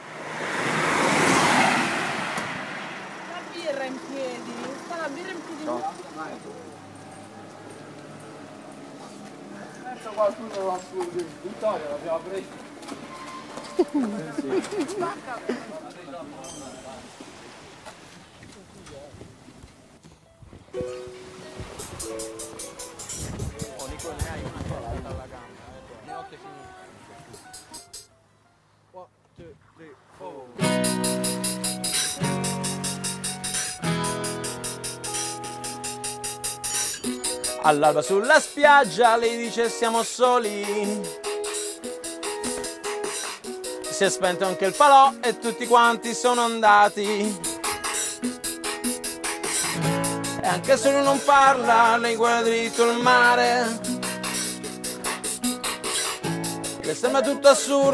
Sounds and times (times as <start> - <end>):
Music: 20.8 - 24.6, 26.6 - 28.2, 30.6 - 57.9.